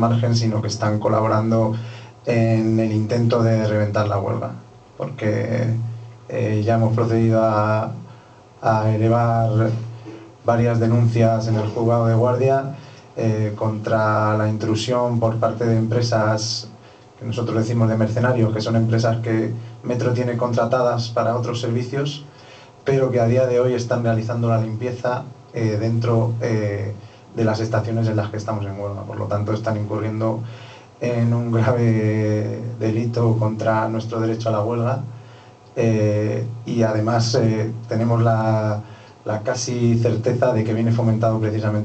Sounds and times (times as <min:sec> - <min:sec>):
Speech: 0:00.0 - 0:35.2, 0:35.8 - 0:41.8.